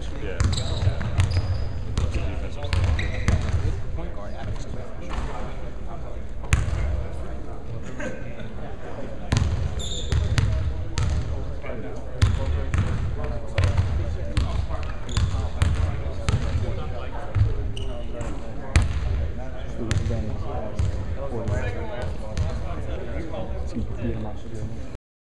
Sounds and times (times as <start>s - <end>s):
Speech: 0.0s - 25.0s.